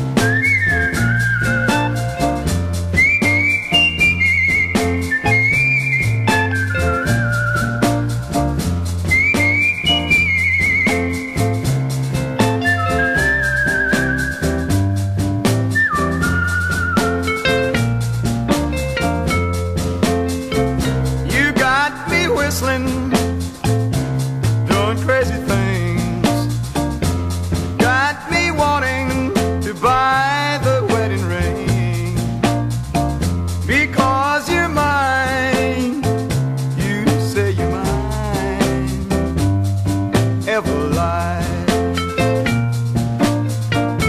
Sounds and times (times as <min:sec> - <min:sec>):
Music: 0:00.0 - 0:44.0.